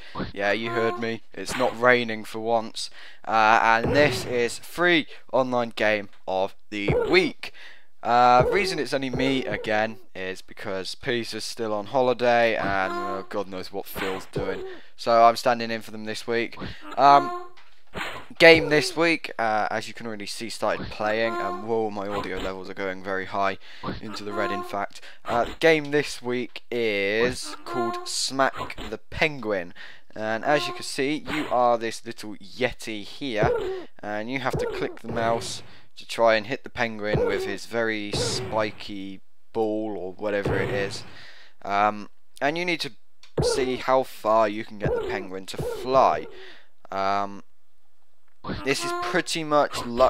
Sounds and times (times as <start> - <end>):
Speech: 0.2 - 17.5, 18.4 - 41.0, 41.6 - 46.3, 46.9 - 47.4, 48.5 - 50.0.